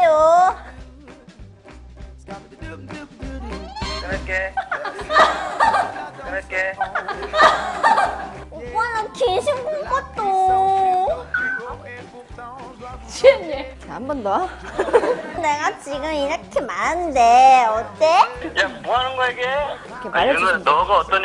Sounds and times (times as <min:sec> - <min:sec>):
Music: 0:00.0 - 0:21.2.